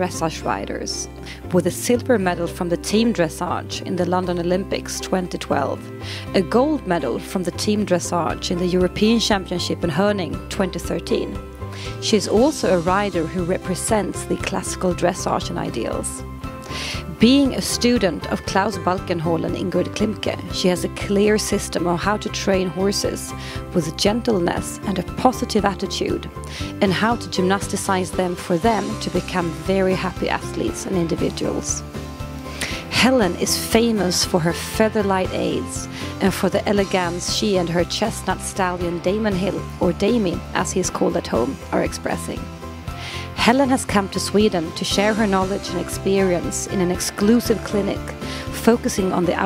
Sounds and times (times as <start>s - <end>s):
Speech: 0.0s - 16.2s, 17.0s - 31.8s, 32.6s - 42.4s, 43.2s - 49.4s
Music: 0.0s - 49.4s.